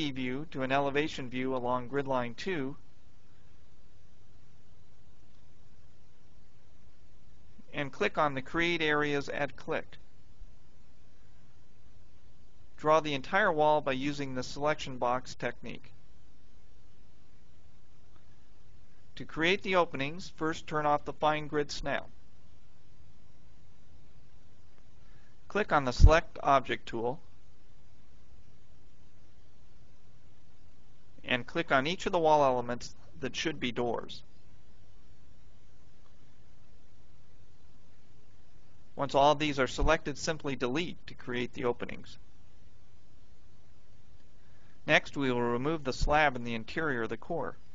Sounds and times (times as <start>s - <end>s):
Speech: 0.0s - 2.8s, 7.6s - 10.0s, 12.8s - 16.0s, 19.2s - 22.2s, 25.5s - 27.3s, 31.2s - 34.3s, 39.0s - 42.2s, 44.8s - 47.6s.